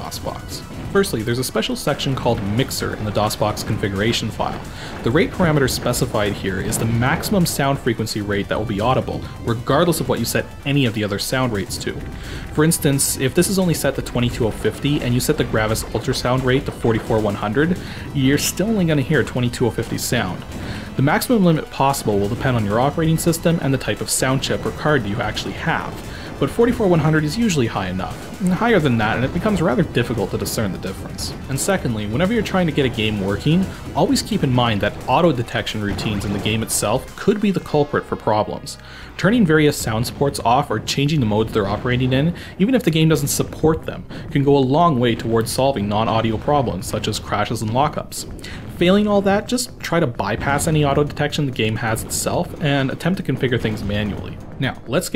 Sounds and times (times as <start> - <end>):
Music: 0.0 - 55.1
Speech: 0.0 - 55.1.